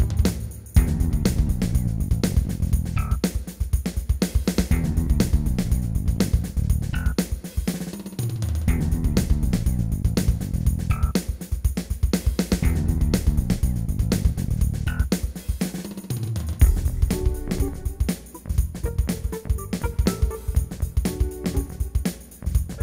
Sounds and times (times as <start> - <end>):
Music: 0.0 - 22.8.